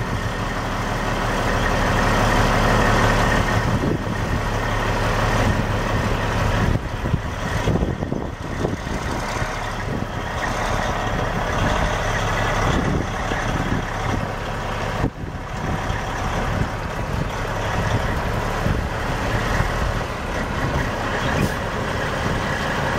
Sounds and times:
Truck: 0.0s - 22.9s.

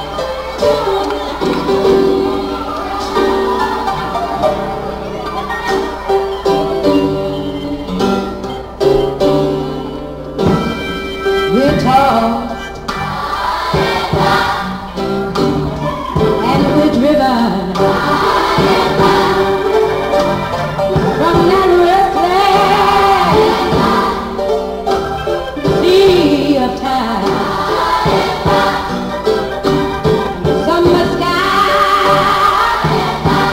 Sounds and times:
Choir: 0.0s - 6.3s, 12.9s - 15.0s, 17.7s - 24.5s, 26.2s - 30.3s, 31.2s - 33.5s.

